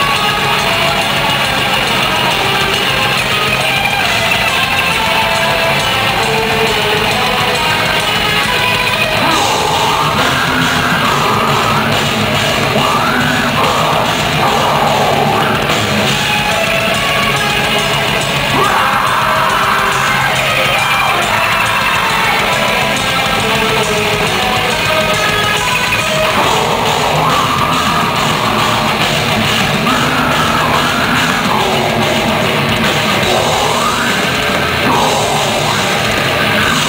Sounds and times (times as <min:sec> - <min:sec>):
Music: 0:00.0 - 0:36.8.